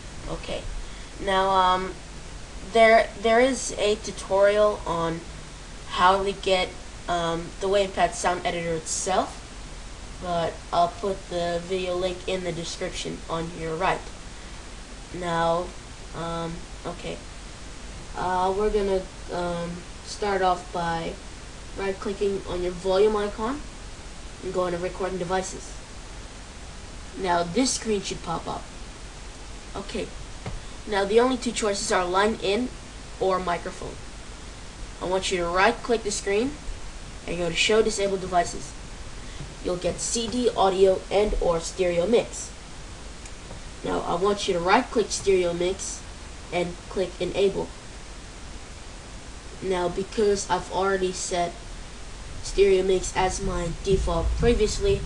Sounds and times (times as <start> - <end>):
Speech: 0.2 - 2.0, 2.6 - 5.3, 5.9 - 9.4, 10.2 - 14.2, 15.1 - 17.3, 18.2 - 21.2, 21.8 - 23.7, 24.4 - 25.8, 27.1 - 28.7, 29.7 - 30.2, 30.9 - 34.0, 35.0 - 36.6, 37.2 - 38.8, 39.6 - 42.6, 43.8 - 47.8, 49.5 - 51.6, 52.4 - 55.0.